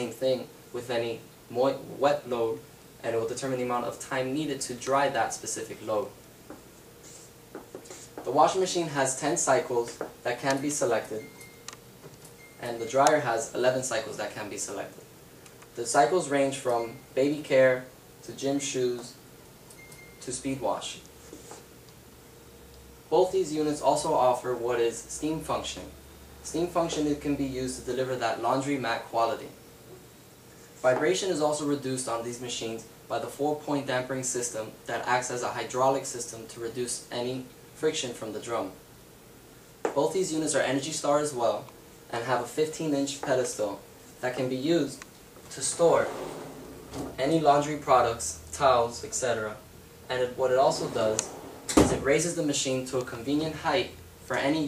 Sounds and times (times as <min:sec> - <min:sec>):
Speech: 0:00.0 - 0:06.2, 0:08.2 - 0:11.3, 0:12.6 - 0:15.0, 0:15.8 - 0:19.2, 0:20.2 - 0:21.1, 0:23.1 - 0:29.6, 0:30.8 - 0:38.8, 0:39.9 - 0:54.6
Inside, small room: 0:00.0 - 0:54.6.